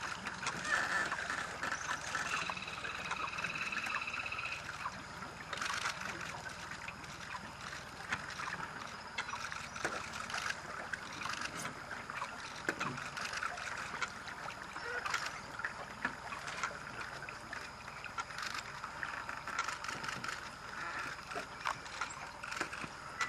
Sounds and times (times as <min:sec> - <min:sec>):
Stream: 0:00.0 - 0:23.2.